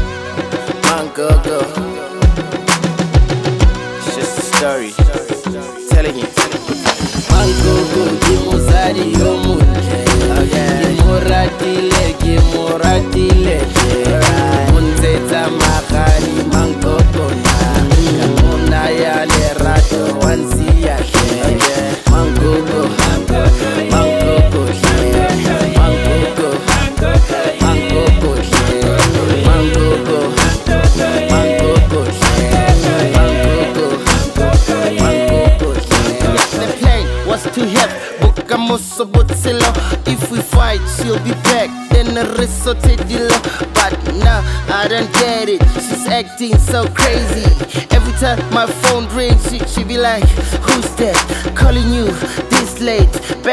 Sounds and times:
Funk: 0.0s - 53.5s.

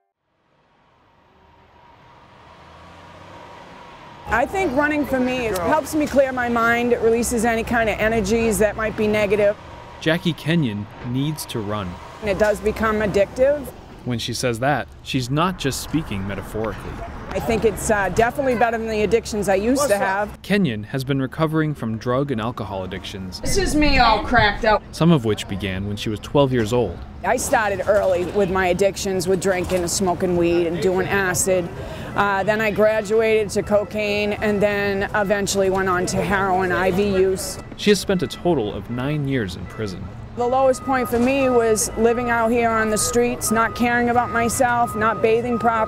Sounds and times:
Outside, urban or manmade: 0.0s - 45.8s.

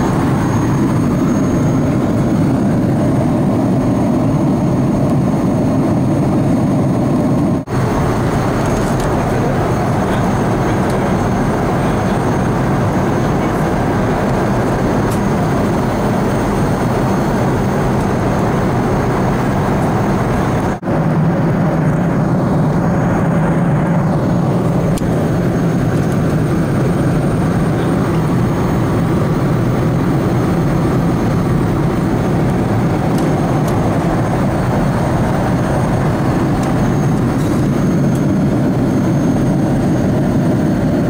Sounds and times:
Fixed-wing aircraft, airplane: 0.0s - 41.0s.

